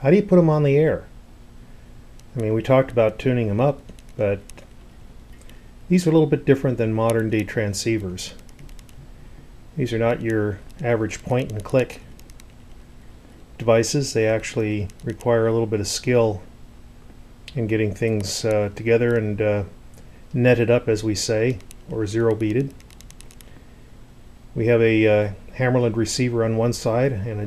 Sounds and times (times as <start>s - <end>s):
Speech: 0.0s - 1.1s, 2.4s - 4.5s, 5.9s - 8.4s, 9.8s - 12.1s, 13.6s - 16.5s, 17.5s - 19.8s, 20.4s - 22.8s, 24.6s - 27.4s.